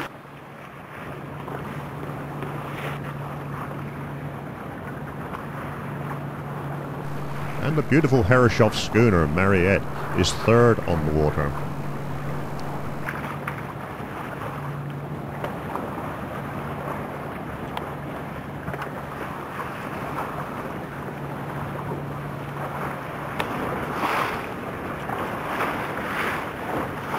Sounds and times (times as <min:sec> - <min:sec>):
Sailboat, sailing ship: 0:00.0 - 0:27.1
Speech: 0:07.1 - 0:13.1.